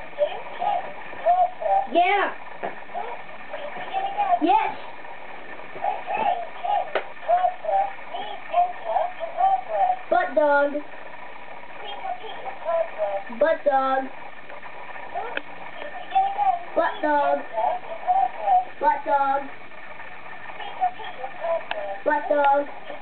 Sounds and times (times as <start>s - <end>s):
Speech: 0.2s - 2.4s, 3.0s - 4.9s, 5.9s - 10.9s, 11.8s - 14.1s, 15.2s - 19.6s, 20.6s - 23.0s.